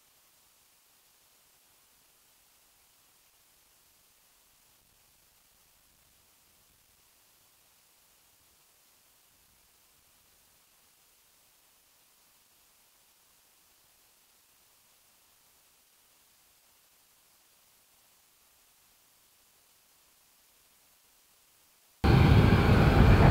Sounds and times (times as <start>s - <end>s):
Silence: 0.0s - 23.3s.